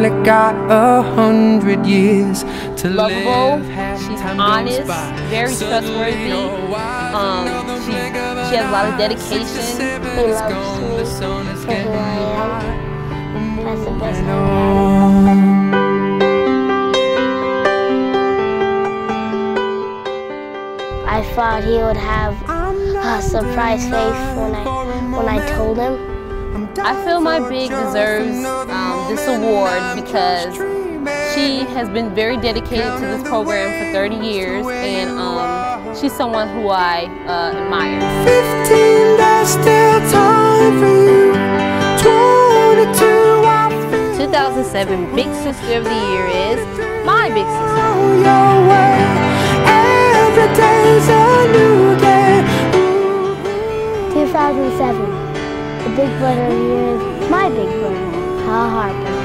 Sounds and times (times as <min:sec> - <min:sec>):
Music: 0:00.0 - 0:59.2
Speech: 0:02.8 - 0:06.6, 0:07.2 - 0:12.7, 0:21.1 - 0:26.0, 0:26.6 - 0:30.6, 0:31.3 - 0:38.0, 0:44.1 - 0:47.6, 0:54.1 - 0:55.1, 0:55.9 - 0:59.0.